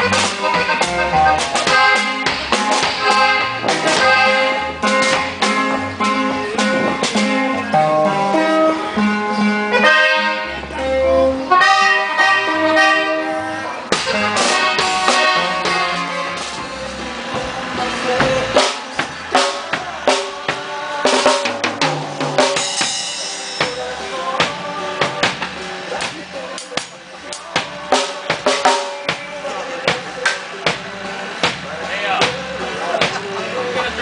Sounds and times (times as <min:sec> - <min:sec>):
Music: 0:00.0 - 0:34.0.